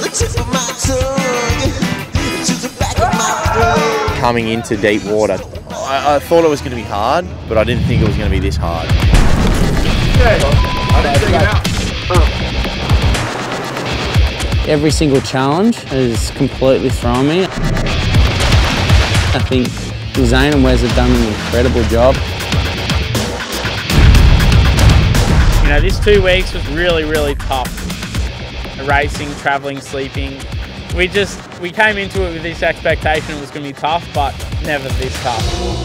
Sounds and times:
Music: 0.0 - 35.8
Speech: 4.2 - 8.9, 14.7 - 17.5, 19.4 - 22.2, 25.6 - 27.7, 28.8 - 30.4, 31.0 - 35.5.

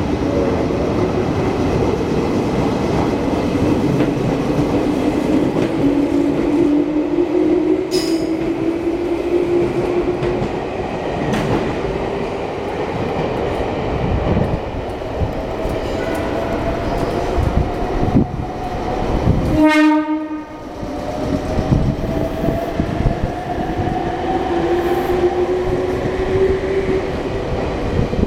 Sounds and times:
Railroad car, train wagon: 7.8 - 28.2
Train horn: 19.4 - 20.7.

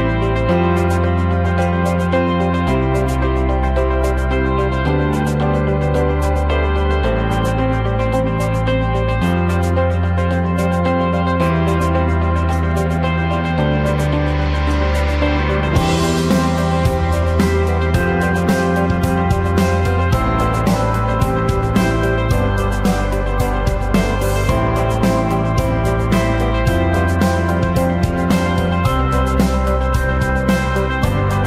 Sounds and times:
Music: 0.0 - 31.4.

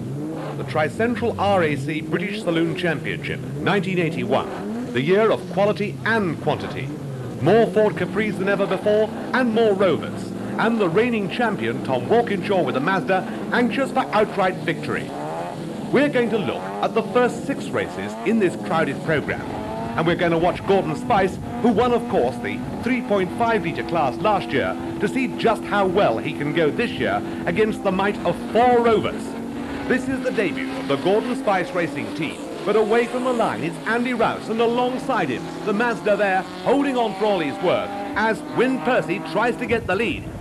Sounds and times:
Car: 0.0 - 40.4
Speech: 0.6 - 15.1, 15.9 - 29.3, 29.9 - 40.3.

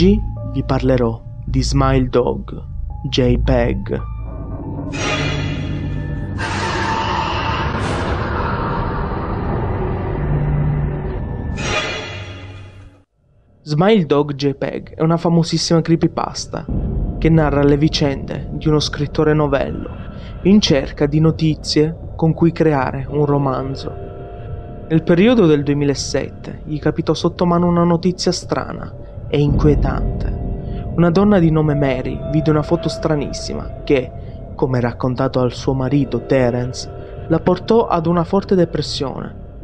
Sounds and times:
Speech: 0.0 - 4.1, 13.7 - 24.0, 24.9 - 30.4, 31.0 - 39.4
Music: 0.0 - 39.6.

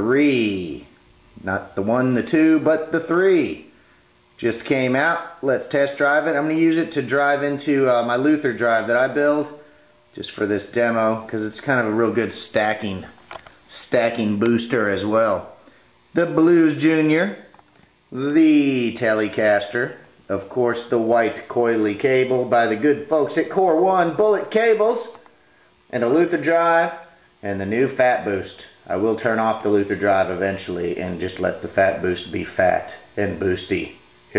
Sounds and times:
Speech: 0.0 - 3.7, 4.4 - 17.5, 18.1 - 25.3, 25.9 - 34.3.

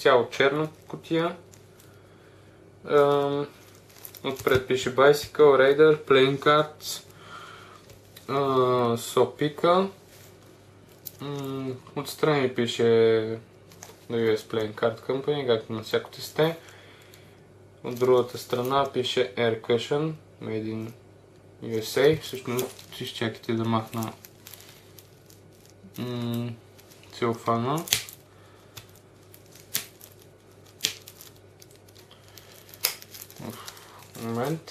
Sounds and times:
Speech: 0.0 - 1.4, 2.9 - 3.6, 4.2 - 7.1, 8.2 - 10.0, 11.2 - 13.4, 14.1 - 16.6, 17.8 - 21.0, 21.6 - 24.2, 26.0 - 28.0, 33.4 - 33.6, 34.2 - 34.7.

